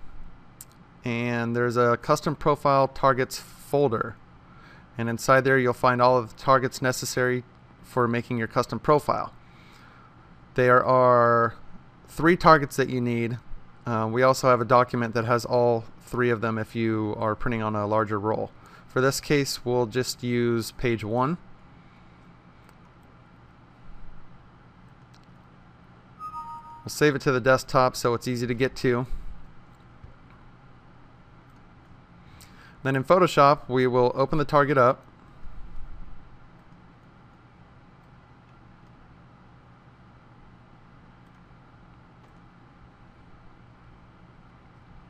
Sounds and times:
Speech: 1.1 - 4.2, 5.0 - 9.4, 10.6 - 21.4, 26.9 - 29.1, 32.8 - 35.0.

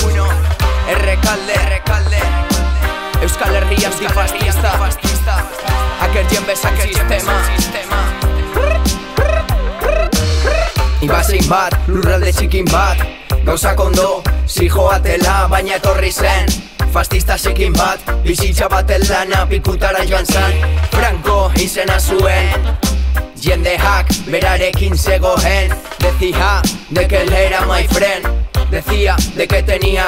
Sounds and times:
Music: 0.0 - 30.0.

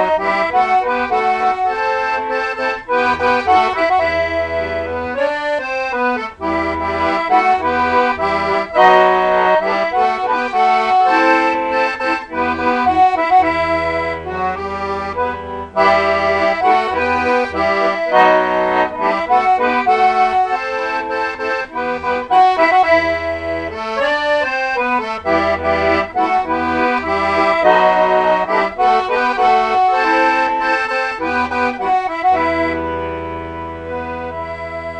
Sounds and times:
Accordion: 0.0 - 35.0.

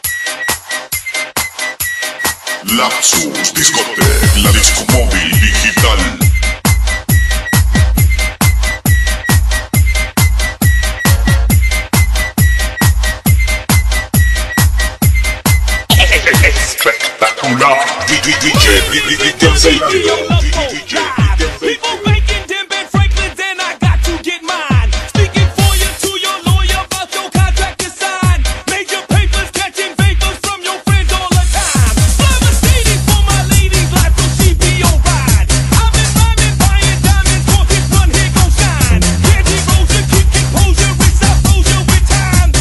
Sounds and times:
Techno: 0.0 - 42.6.

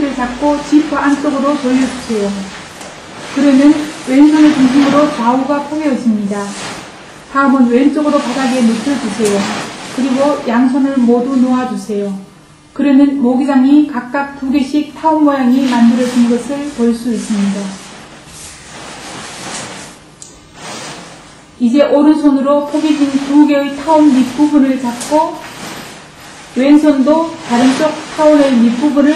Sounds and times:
Speech: 0.0 - 2.6, 3.3 - 6.7, 7.3 - 17.8, 21.6 - 25.5, 26.6 - 29.1.

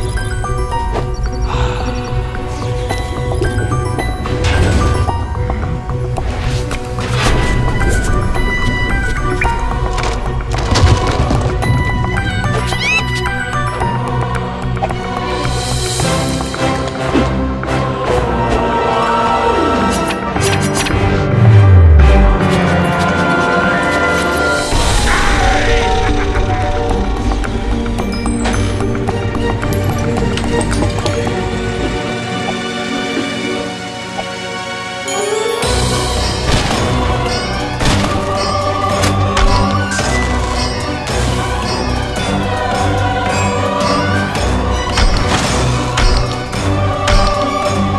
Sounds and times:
Music: 0.0 - 47.9.

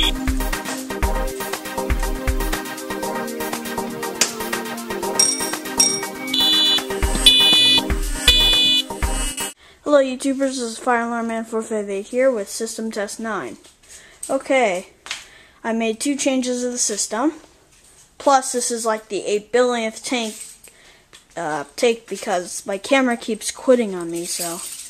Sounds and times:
Speech: 9.9 - 13.6, 14.3 - 15.0, 15.6 - 17.5, 18.2 - 20.4, 21.4 - 24.7.

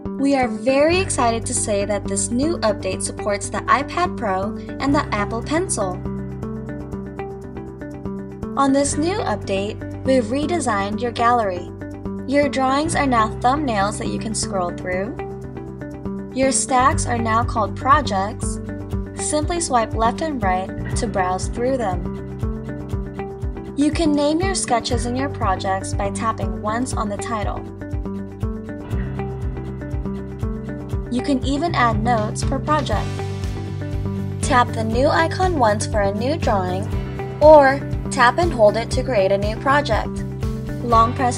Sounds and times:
Music: 0.0 - 41.3
Speech: 0.2 - 6.0, 8.6 - 11.7, 12.3 - 15.2, 16.4 - 18.6, 19.2 - 22.0, 23.8 - 27.6, 31.1 - 33.1, 34.4 - 40.2, 40.8 - 41.3.

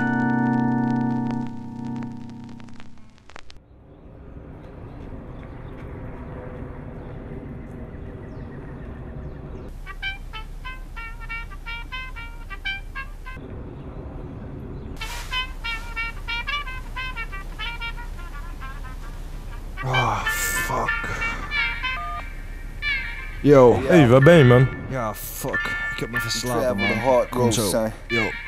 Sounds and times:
Music: 0.0 - 3.0, 9.8 - 13.4, 15.3 - 19.0, 19.8 - 28.4.

